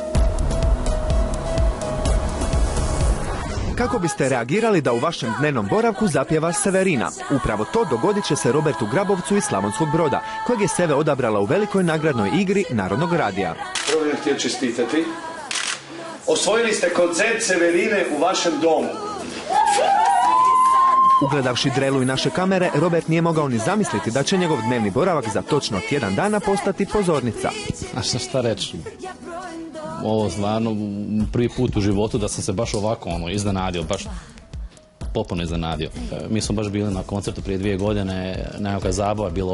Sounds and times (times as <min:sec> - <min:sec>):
Music: 0:00.0 - 0:39.5
Speech: 0:35.2 - 0:39.5.